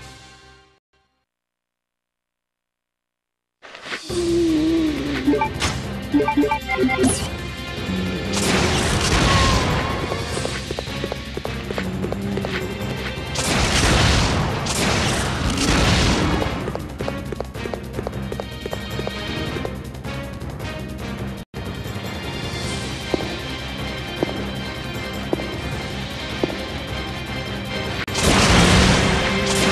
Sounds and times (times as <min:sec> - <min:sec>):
Music: 0:04.0 - 0:29.7
Run: 0:10.0 - 0:13.1, 0:16.7 - 0:19.8.